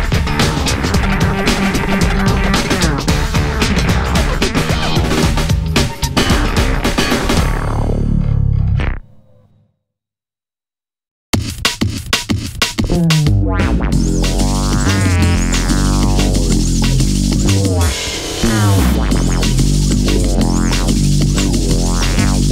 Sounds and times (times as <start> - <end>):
Synthesizer: 0.0 - 8.5, 12.8 - 22.5
Bass guitar: 0.0 - 9.0, 12.8 - 22.5
Effects unit: 12.8 - 22.5.